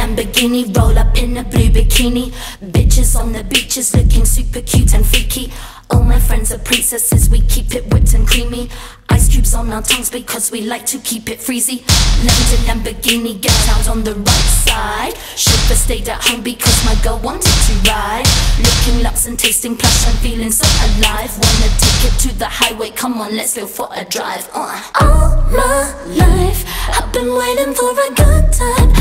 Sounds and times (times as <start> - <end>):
Music: 0.0 - 10.6, 11.9 - 23.0, 25.0 - 29.0.